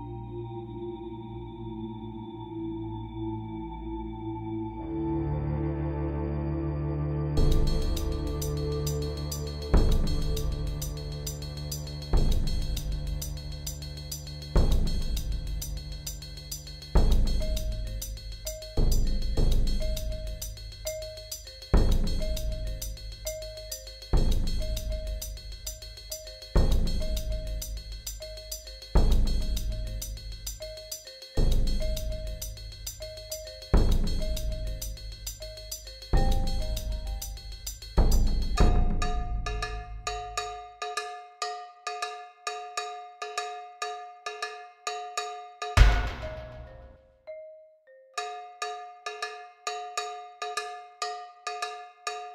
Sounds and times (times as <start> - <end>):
Music: 0.0 - 52.3.